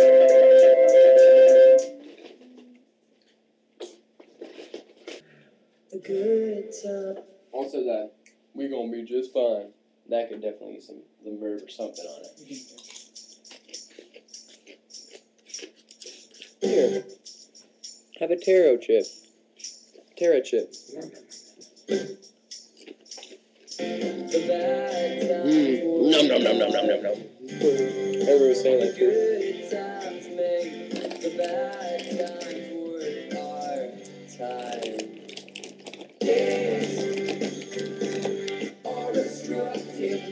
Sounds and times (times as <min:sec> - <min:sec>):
Speech: 0:07.6 - 0:12.8, 0:18.2 - 0:19.1, 0:20.2 - 0:21.2, 0:26.0 - 0:27.2.